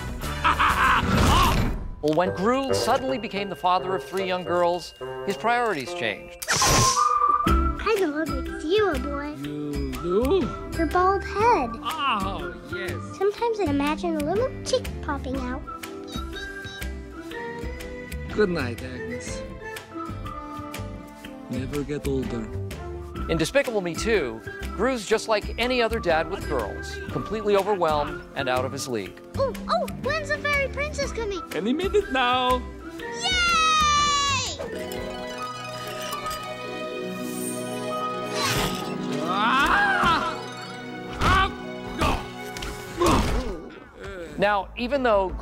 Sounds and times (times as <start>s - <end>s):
Music: 0.0s - 45.4s.